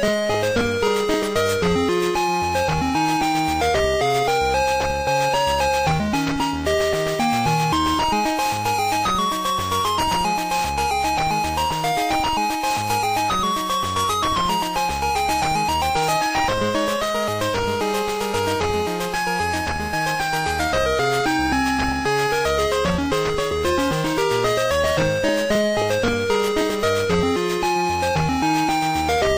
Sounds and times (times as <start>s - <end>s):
Music: 0.0s - 29.3s.